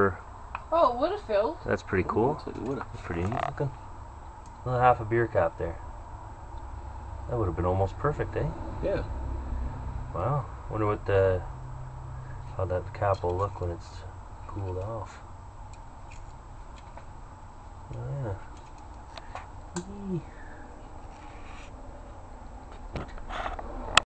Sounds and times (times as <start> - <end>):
Speech: 0.0 - 3.8, 4.7 - 5.8, 7.3 - 9.1, 10.2 - 11.5, 12.6 - 15.2, 17.9 - 18.4, 19.8 - 20.4.